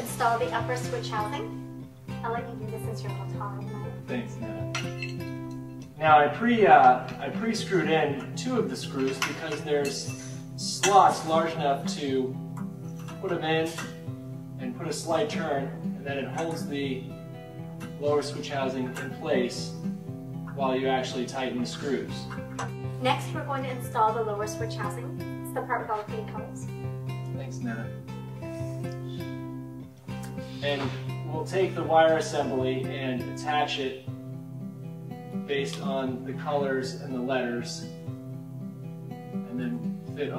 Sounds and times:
Music: 0.0s - 40.3s.

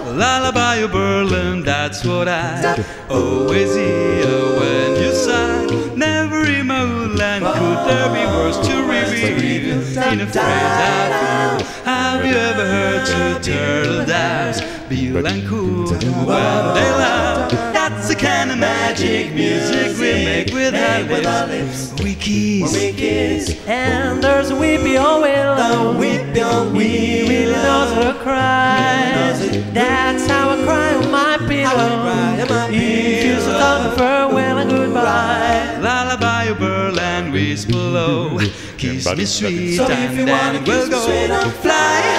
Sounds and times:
Music: 0.0s - 42.1s.

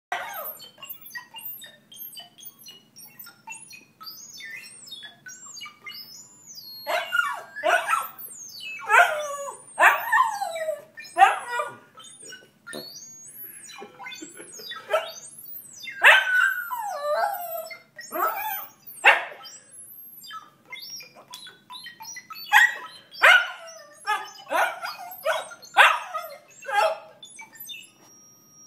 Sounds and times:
Dog: 0.1s - 1.8s, 6.9s - 12.4s, 14.6s - 19.6s, 22.2s - 27.9s
Canidae, dogs, wolves: 0.1s - 27.9s.

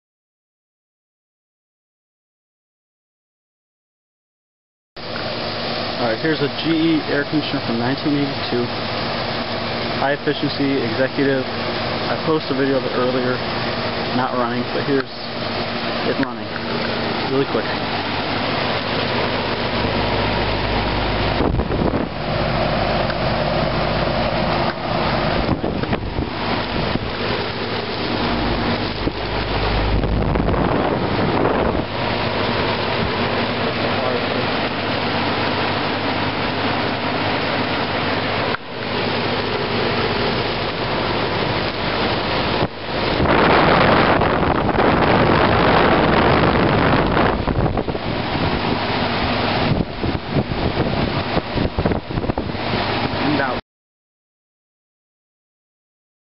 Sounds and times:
Air conditioning: 5.0s - 53.6s
Outside, urban or manmade: 5.0s - 53.6s.

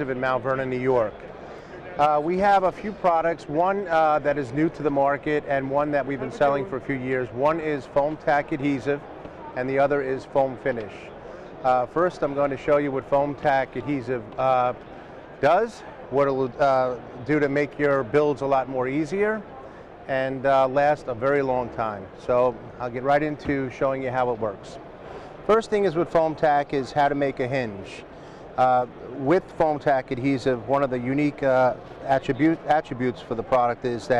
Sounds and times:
Speech: 0.0s - 1.2s, 1.8s - 14.8s, 15.4s - 24.8s, 25.5s - 28.0s, 28.6s - 34.1s.

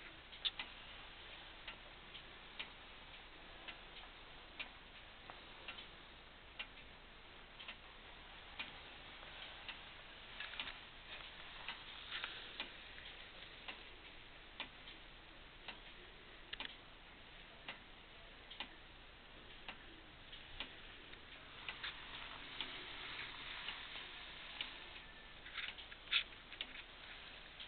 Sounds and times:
Tick-tock: 7.6s - 7.9s, 10.4s - 16.9s, 18.5s - 18.8s.

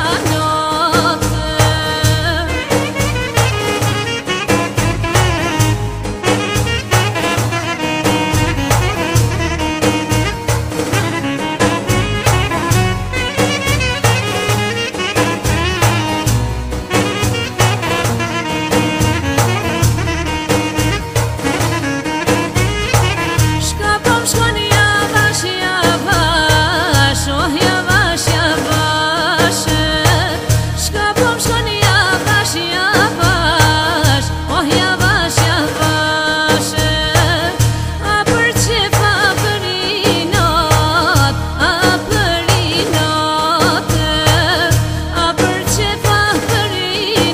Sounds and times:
Folk music: 0.0s - 47.3s.

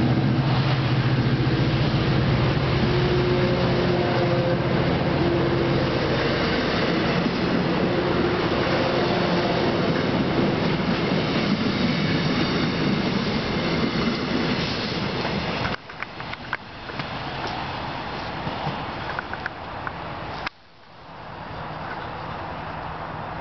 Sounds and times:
Railroad car, train wagon: 0.0s - 23.4s
Train: 0.0s - 23.4s.

